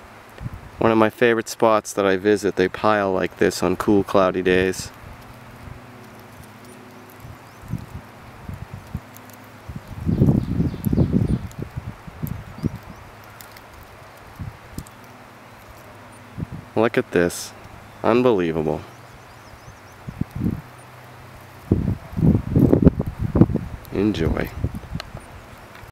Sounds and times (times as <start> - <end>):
Outside, rural or natural: 0.0 - 25.9
Speech: 0.8 - 5.0, 16.8 - 18.9, 23.9 - 24.6.